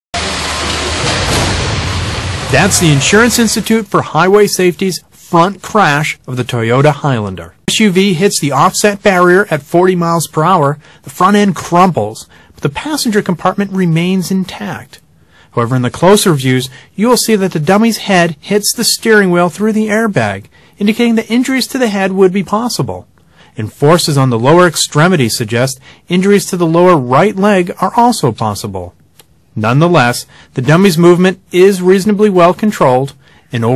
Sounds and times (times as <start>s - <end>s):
Speech: 2.5s - 29.0s, 29.6s - 33.7s.